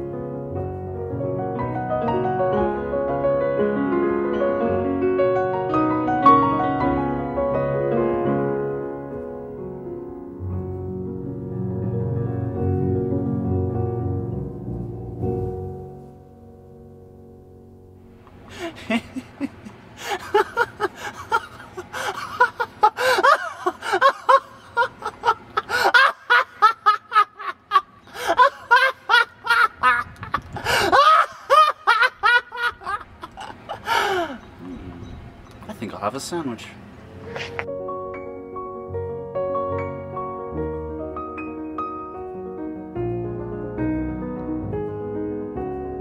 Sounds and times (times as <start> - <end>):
Piano: 0.0 - 46.0.